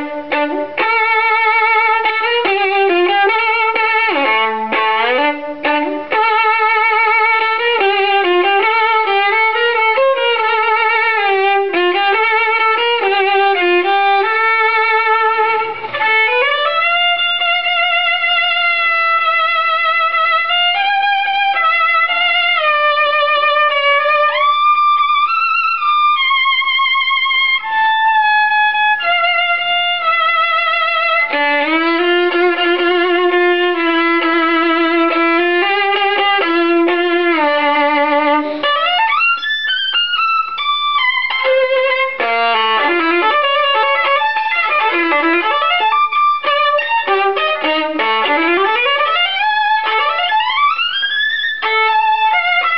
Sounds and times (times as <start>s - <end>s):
Violin, fiddle: 0.0s - 52.7s.